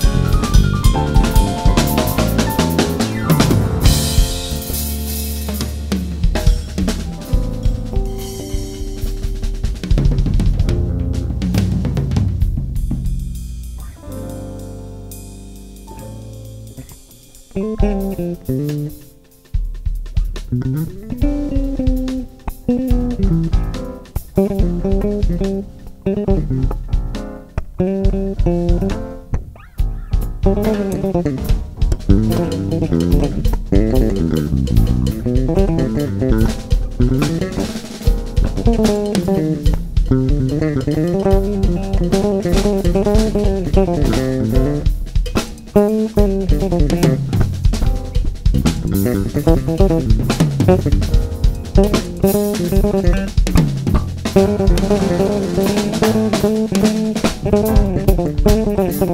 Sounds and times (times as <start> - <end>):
Snare drum: 0.0 - 14.3, 30.0 - 59.1
Bass drum: 0.0 - 59.1
Drum kit: 0.0 - 59.1.